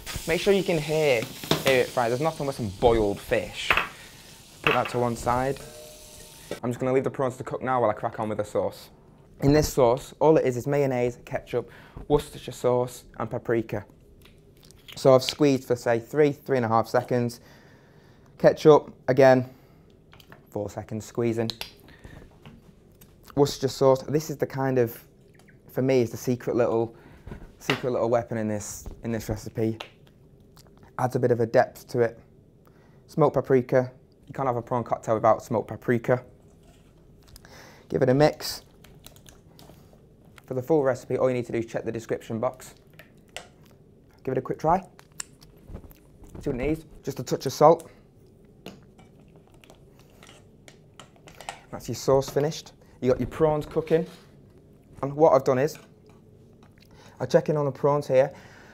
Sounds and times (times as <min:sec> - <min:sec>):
Inside, small room: 0:00.0 - 0:58.7
Speech: 0:00.3 - 0:03.8, 0:04.7 - 0:05.7, 0:06.6 - 0:13.9, 0:15.0 - 0:17.4, 0:18.4 - 0:19.5, 0:20.5 - 0:21.6, 0:23.3 - 0:25.1, 0:25.7 - 0:27.0, 0:27.6 - 0:29.8, 0:31.0 - 0:32.3, 0:33.1 - 0:36.3, 0:37.9 - 0:38.7, 0:40.5 - 0:42.8, 0:44.1 - 0:44.9, 0:46.4 - 0:47.9, 0:51.7 - 0:54.2, 0:55.0 - 0:55.9, 0:57.2 - 0:58.4.